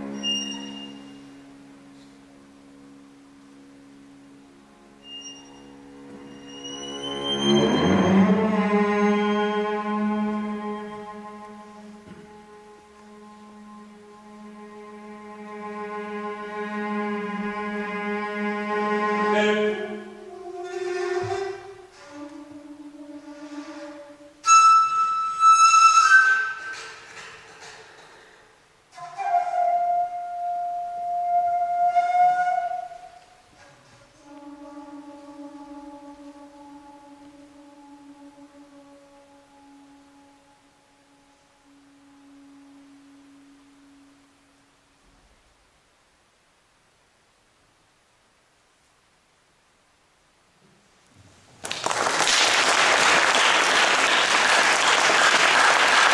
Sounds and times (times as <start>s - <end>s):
Inside, large room or hall: 0.0s - 56.1s.